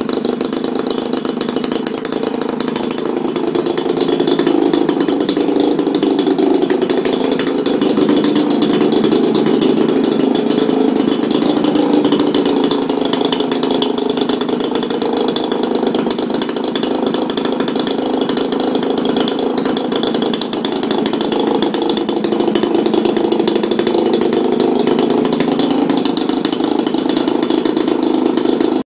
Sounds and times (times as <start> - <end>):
Medium engine (mid frequency): 0.0 - 28.8
Vehicle: 0.0 - 28.8.